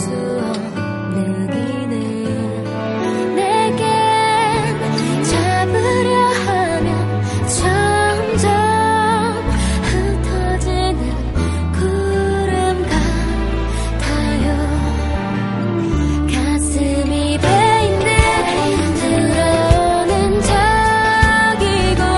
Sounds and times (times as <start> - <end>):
Music: 0.0 - 22.1.